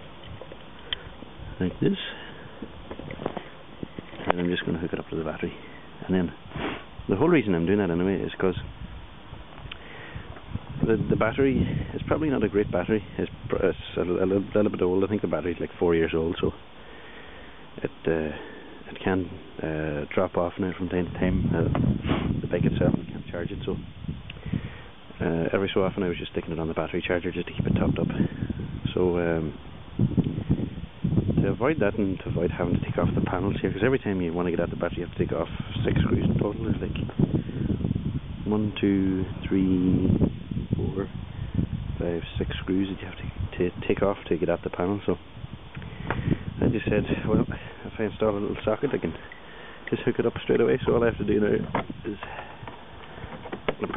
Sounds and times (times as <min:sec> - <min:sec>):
Speech: 0:01.6 - 0:02.3, 0:04.2 - 0:06.4, 0:07.1 - 0:08.7, 0:10.8 - 0:16.6, 0:17.8 - 0:21.8, 0:22.5 - 0:23.8, 0:25.2 - 0:28.3, 0:28.9 - 0:29.6, 0:31.4 - 0:37.1, 0:38.4 - 0:40.2, 0:40.8 - 0:41.1, 0:42.0 - 0:45.2, 0:46.6 - 0:49.2, 0:49.9 - 0:52.5, 0:53.7 - 0:53.9.